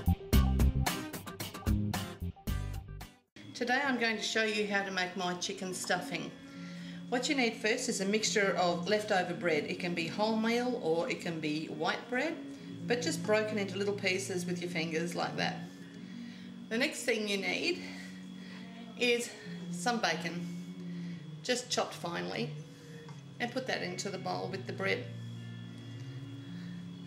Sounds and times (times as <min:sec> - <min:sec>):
Speech: 0:03.6 - 0:06.4, 0:07.1 - 0:15.6, 0:16.7 - 0:17.9, 0:19.0 - 0:20.4, 0:21.5 - 0:22.5, 0:23.4 - 0:25.1.